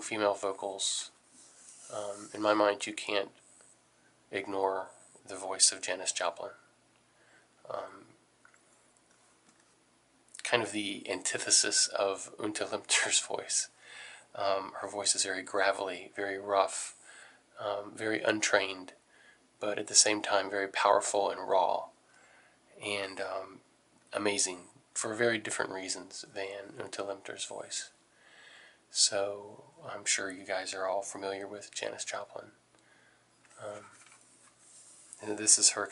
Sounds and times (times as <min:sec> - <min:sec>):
Speech: 0:00.0 - 0:01.2, 0:01.9 - 0:03.4, 0:04.3 - 0:06.7, 0:07.7 - 0:08.1, 0:10.4 - 0:17.0, 0:17.6 - 0:19.0, 0:19.6 - 0:22.0, 0:22.8 - 0:28.0, 0:28.9 - 0:32.6, 0:33.6 - 0:34.0, 0:35.2 - 0:35.9
Inside, small room: 0:00.0 - 0:35.9.